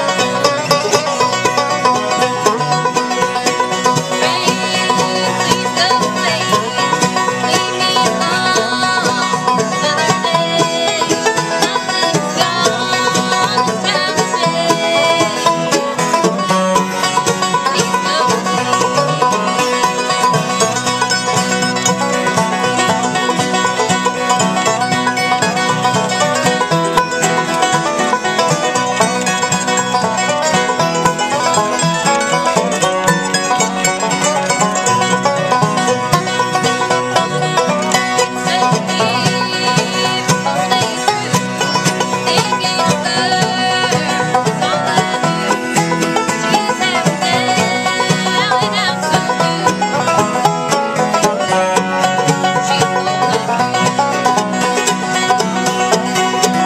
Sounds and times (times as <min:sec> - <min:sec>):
Music: 0:00.0 - 0:56.6.